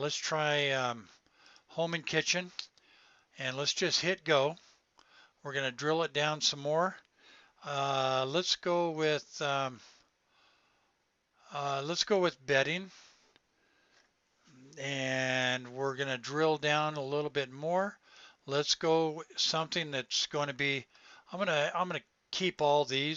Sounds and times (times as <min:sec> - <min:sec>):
Speech: 0:00.0 - 0:01.1, 0:01.7 - 0:02.7, 0:03.4 - 0:04.6, 0:05.5 - 0:07.0, 0:07.6 - 0:09.9, 0:11.5 - 0:13.0, 0:14.8 - 0:23.1.